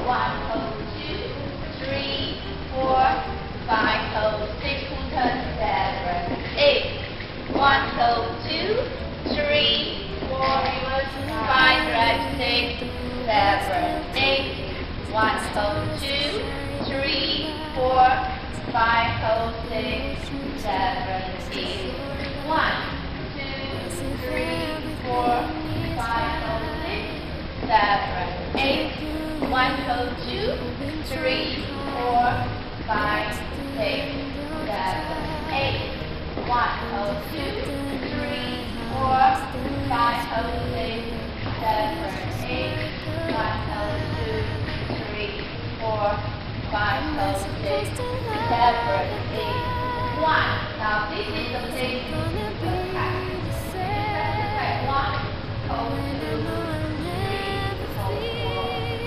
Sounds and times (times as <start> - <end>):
Speech: 0.0 - 7.0, 7.6 - 59.0
Music: 0.0 - 59.0.